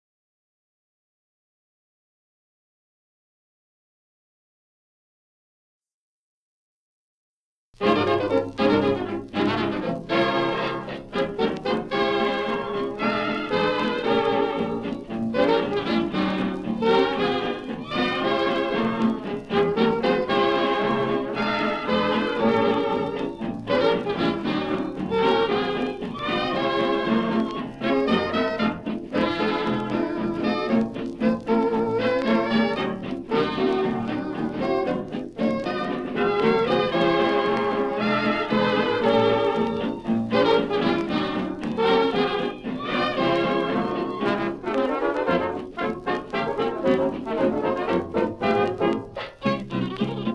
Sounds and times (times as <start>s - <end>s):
Blues: 7.8s - 50.3s
Orchestra: 7.8s - 50.3s.